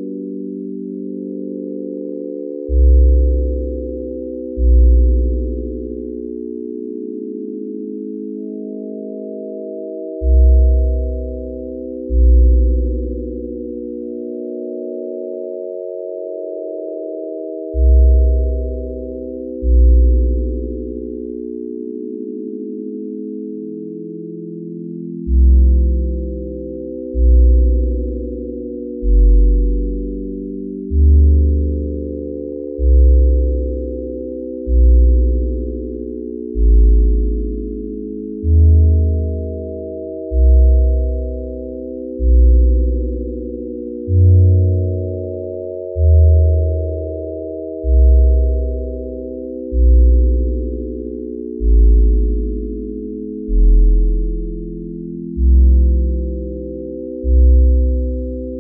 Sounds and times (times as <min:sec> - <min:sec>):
Sine wave: 0:00.0 - 0:58.6.